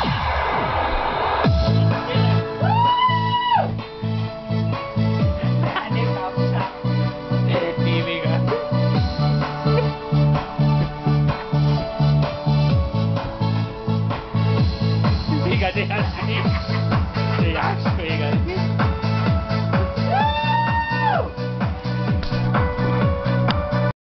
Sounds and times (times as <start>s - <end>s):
Music: 0.0s - 24.0s
Speech: 7.5s - 8.6s, 17.4s - 18.7s.